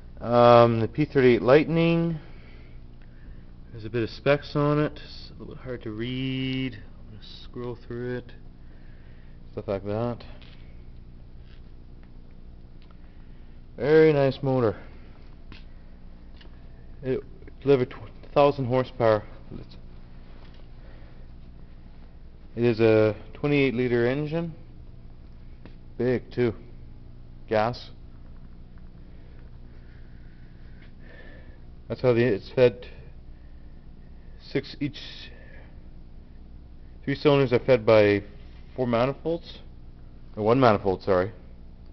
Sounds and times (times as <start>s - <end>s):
Speech: 0.2s - 2.3s, 3.7s - 8.4s, 9.6s - 10.4s, 13.8s - 14.9s, 17.0s - 19.8s, 22.6s - 24.6s, 26.0s - 26.7s, 27.5s - 28.0s, 31.9s - 33.1s, 34.4s - 35.7s, 37.0s - 39.7s, 40.3s - 41.4s.